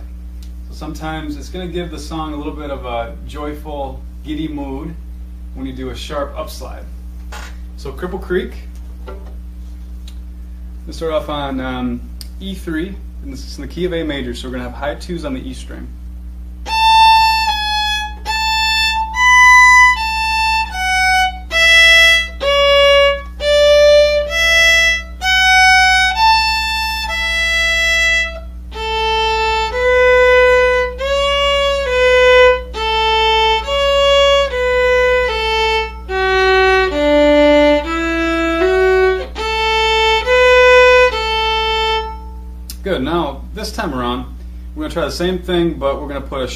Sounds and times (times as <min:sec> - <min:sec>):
Violin, fiddle: 0:16.7 - 0:42.4.